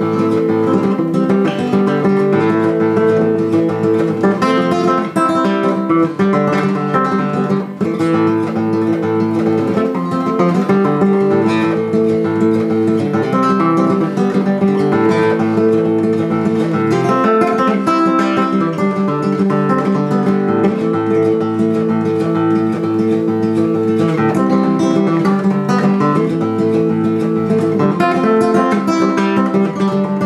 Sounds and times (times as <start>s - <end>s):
Music: 0.0s - 30.2s.